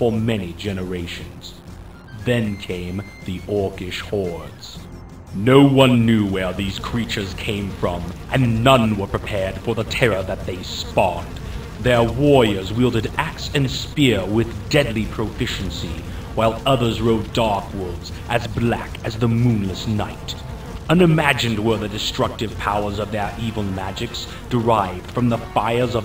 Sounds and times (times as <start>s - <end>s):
Speech: 0.0s - 1.6s, 2.2s - 26.0s.